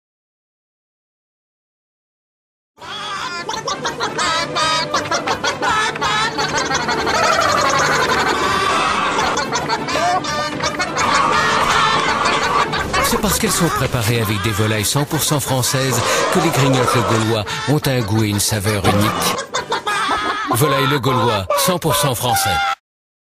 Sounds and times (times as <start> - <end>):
Music: 2.8 - 7.6, 8.3 - 14.4
Speech: 13.0 - 19.4, 20.5 - 22.8.